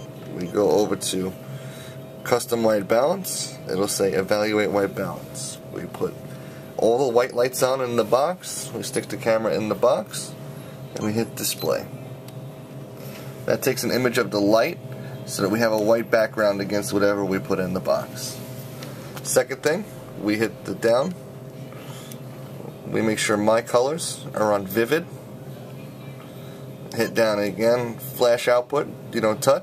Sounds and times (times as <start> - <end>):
Speech: 0.3 - 1.4, 2.2 - 6.2, 6.8 - 12.0, 13.5 - 18.4, 19.2 - 21.2, 22.6 - 25.2, 26.9 - 29.6.